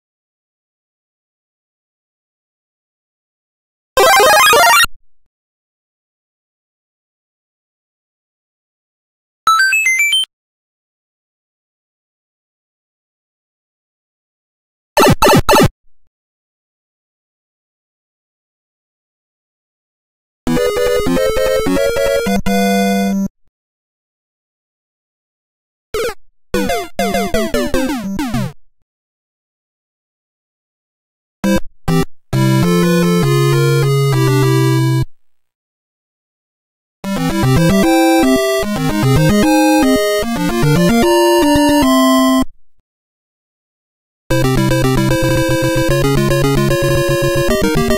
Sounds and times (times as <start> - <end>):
Music: 20.5 - 23.3, 26.0 - 28.6, 31.5 - 35.2, 37.1 - 42.5, 44.3 - 47.9.